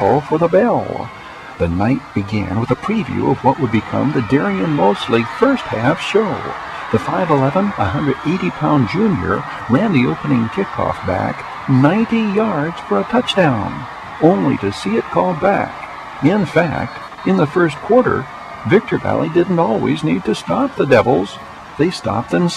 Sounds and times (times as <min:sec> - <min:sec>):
Speech: 0:00.0 - 0:22.5.